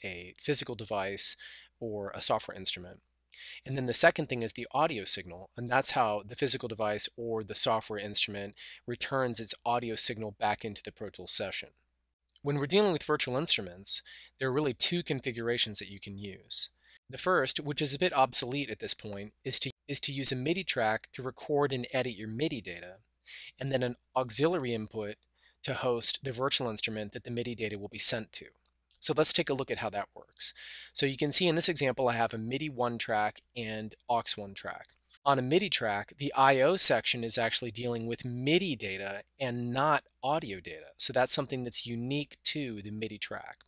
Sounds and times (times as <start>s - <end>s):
Speech: 0.0s - 11.7s, 12.4s - 43.6s.